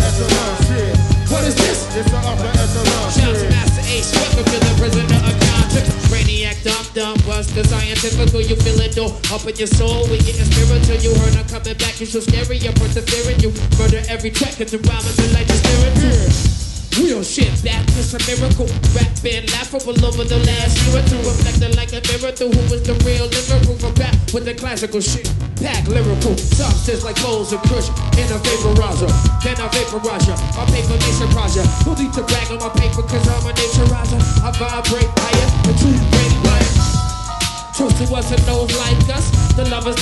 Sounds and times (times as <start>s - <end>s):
Musical instrument: 0.0s - 12.2s, 25.9s - 40.0s.